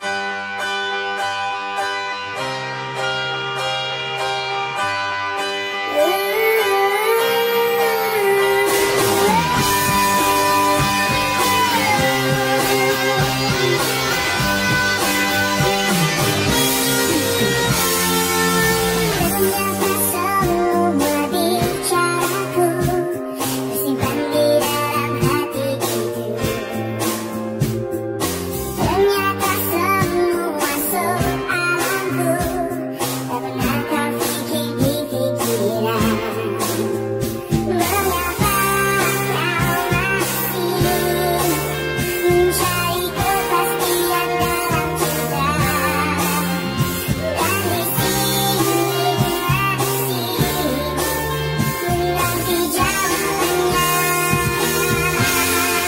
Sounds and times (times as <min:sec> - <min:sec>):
Music: 0:00.0 - 0:55.8.